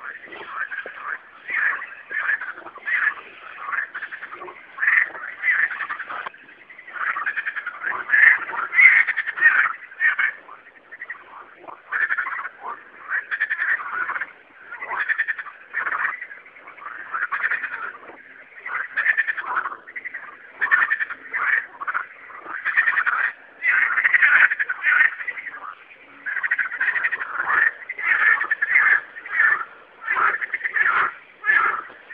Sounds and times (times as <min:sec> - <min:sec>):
Croak: 0:00.0 - 0:32.1.